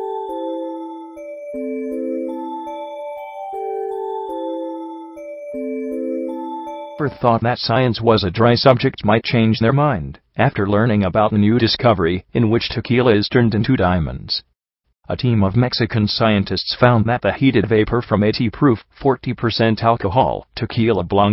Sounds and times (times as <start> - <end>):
Glockenspiel: 0.0 - 7.4
Speech: 7.0 - 14.5, 15.1 - 21.3.